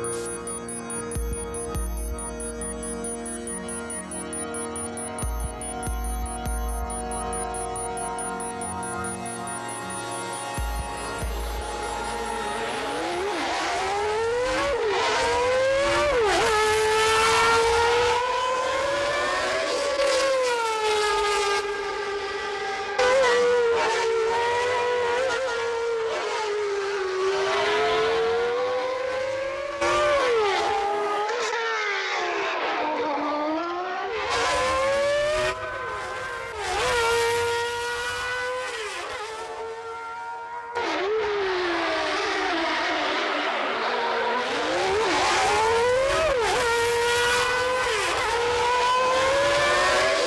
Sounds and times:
Music: 0.0 - 14.3.

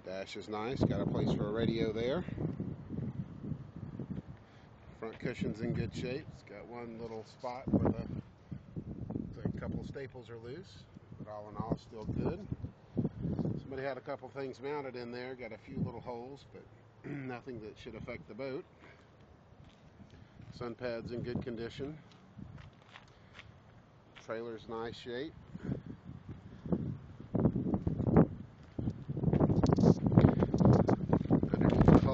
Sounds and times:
Speech: 0.0 - 2.4, 5.0 - 8.2, 9.3 - 12.5, 13.6 - 18.7, 20.5 - 22.1, 24.2 - 25.4, 31.5 - 32.1.

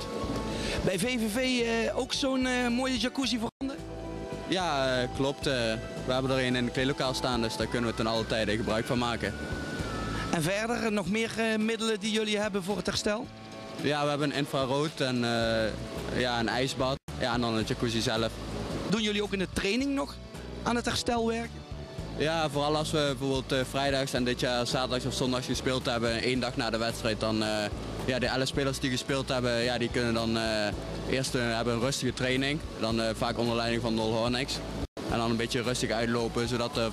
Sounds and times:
Music: 0.0 - 36.9
Speech: 0.8 - 3.8, 4.5 - 9.3, 10.3 - 18.3, 18.9 - 21.5, 22.2 - 36.9.

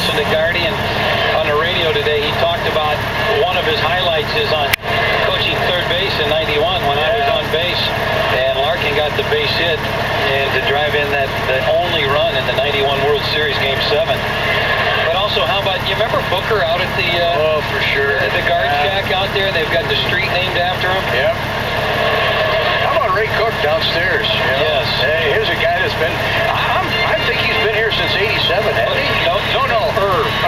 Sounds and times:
Speech: 0.0 - 21.4, 22.5 - 30.4
Vehicle: 0.0 - 30.4.

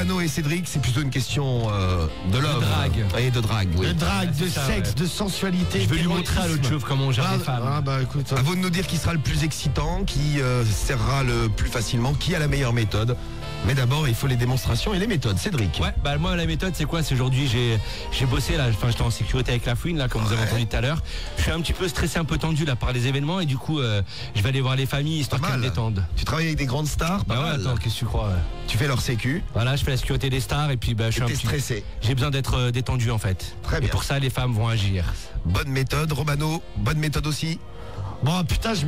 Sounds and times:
Speech: 0.0 - 37.6, 38.2 - 38.8
Music: 0.0 - 38.8.

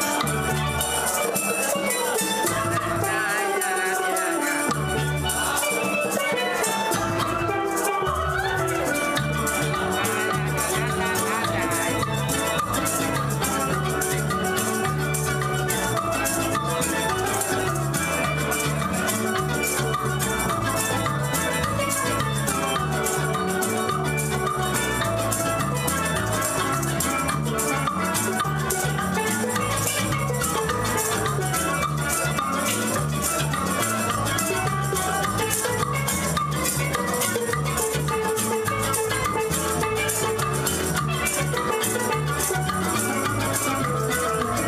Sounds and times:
Guitar: 0.0 - 44.6
Music of Latin America: 0.0 - 44.6
Steelpan: 0.0 - 44.6
Drum: 4.7 - 44.6.

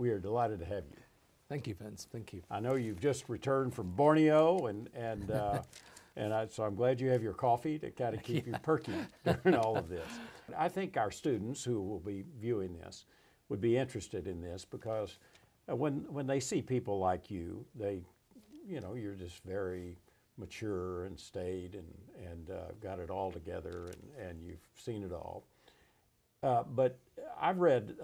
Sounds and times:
Speech: 0.0 - 25.5, 26.4 - 28.0.

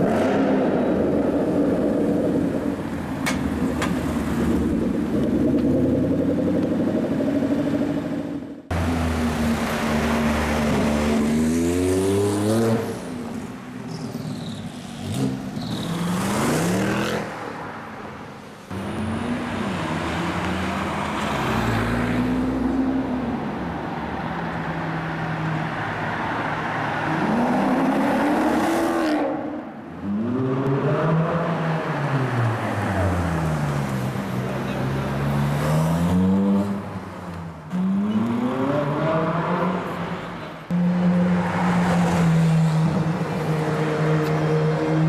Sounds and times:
Bus: 0.0 - 45.0.

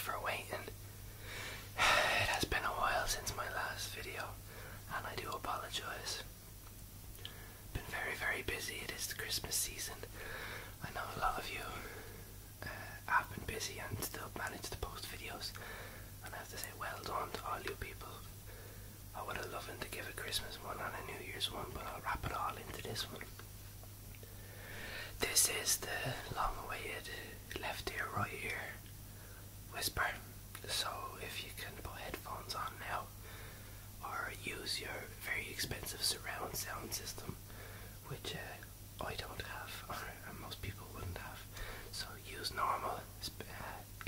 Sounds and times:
Whispering: 0.0 - 0.8, 1.8 - 6.3, 7.7 - 10.2, 10.8 - 12.0, 12.6 - 15.6, 16.2 - 18.3, 19.1 - 23.4, 25.2 - 28.8, 29.7 - 33.2, 34.0 - 37.4, 38.0 - 44.0.

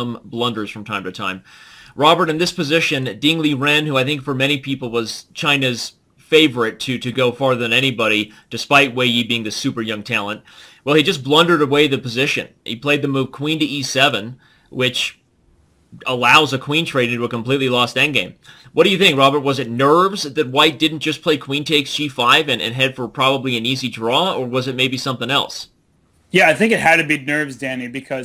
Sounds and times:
Speech: 0.0 - 1.4, 2.0 - 15.2, 16.0 - 25.7, 26.3 - 28.2.

